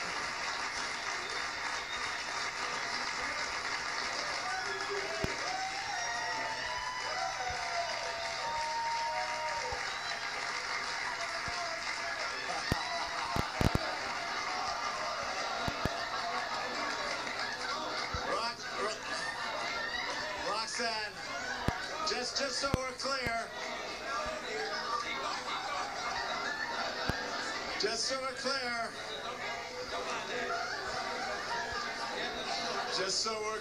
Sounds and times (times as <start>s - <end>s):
Male speech, man speaking: 18.3s - 19.3s, 20.4s - 21.3s, 21.9s - 24.8s, 27.8s - 29.0s, 32.5s - 33.6s.